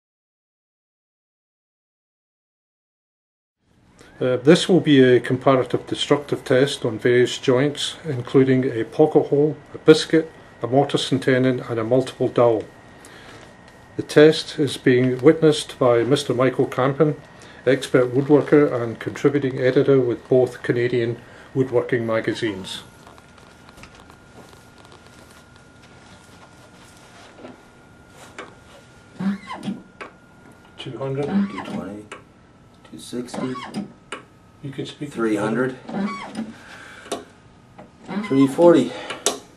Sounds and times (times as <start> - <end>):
Speech: 4.2 - 12.7, 14.0 - 22.9, 30.8 - 32.2, 32.9 - 33.7, 34.6 - 35.8, 38.1 - 39.1.